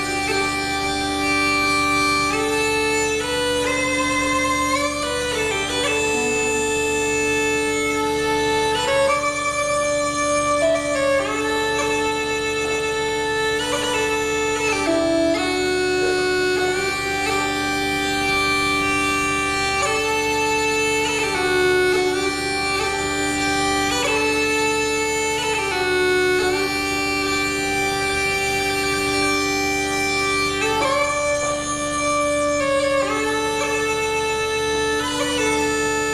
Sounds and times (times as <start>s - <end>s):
Music: 0.0s - 36.1s.